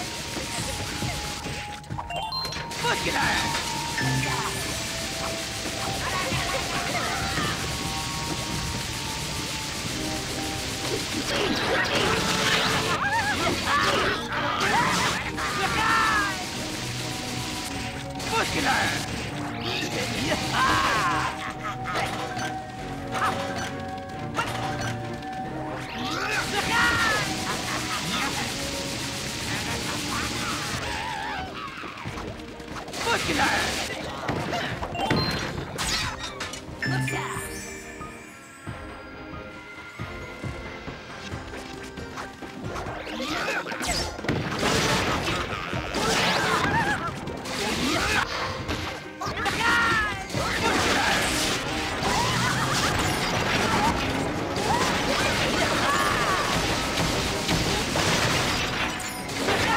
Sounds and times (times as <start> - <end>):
Music: 0.0 - 59.7.